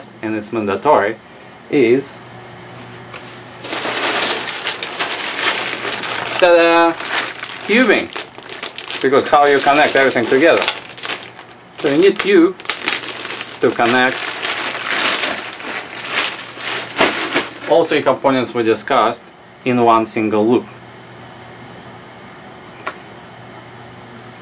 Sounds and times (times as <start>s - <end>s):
Speech: 0.0s - 2.2s, 6.4s - 7.0s, 7.7s - 8.1s, 9.0s - 10.7s, 11.8s - 12.6s, 13.6s - 14.2s, 17.6s - 20.8s.